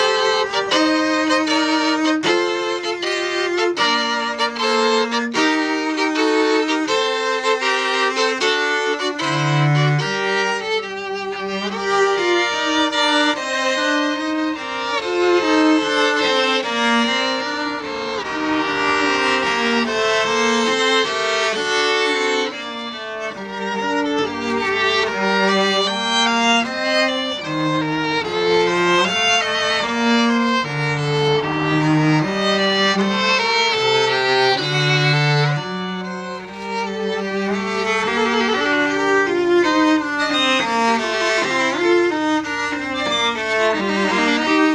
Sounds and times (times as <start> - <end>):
Cello: 0.0 - 44.7
Violin, fiddle: 0.0 - 44.7.